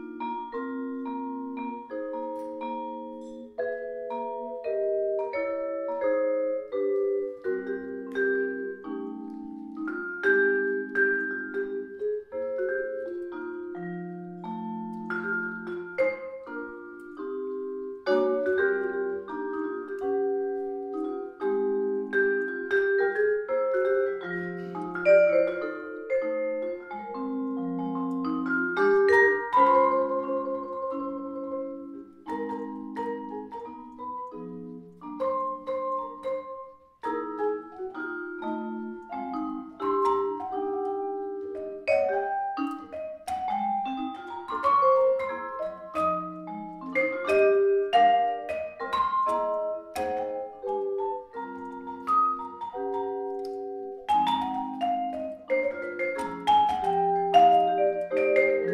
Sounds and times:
Vibraphone: 0.0 - 58.7.

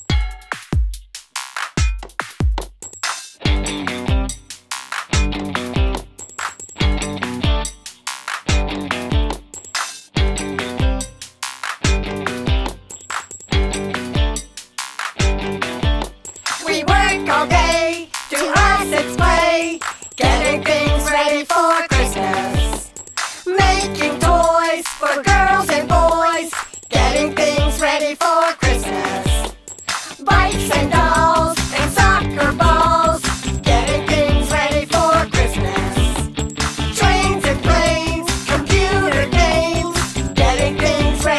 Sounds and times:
Background music: 10.2 - 41.3.

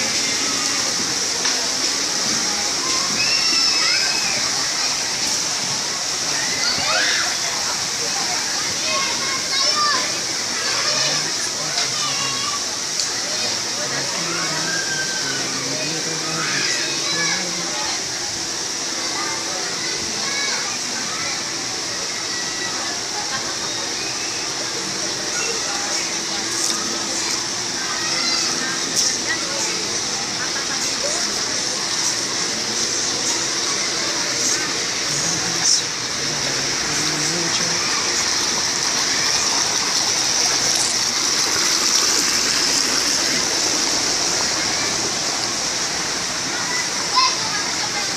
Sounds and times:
Speech: 0.0 - 41.1, 46.3 - 48.1
Waterfall: 0.0 - 48.1.

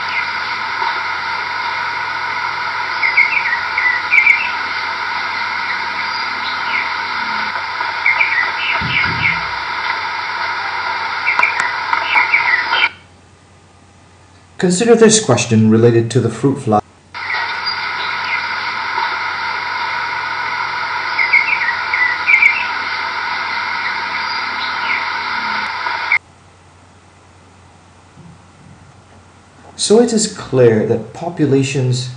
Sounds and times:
Speech: 14.6 - 16.9, 29.8 - 32.1.

